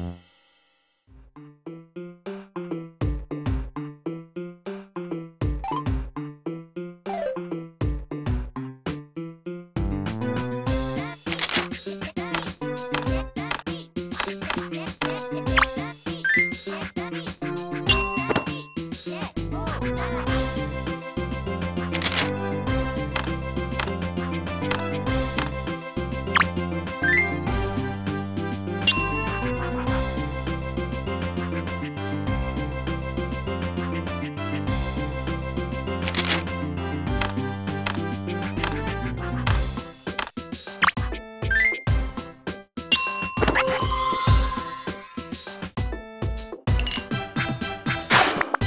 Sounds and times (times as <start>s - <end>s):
Music: 0.0s - 48.6s
Speech: 11.9s - 17.4s, 18.2s - 20.4s.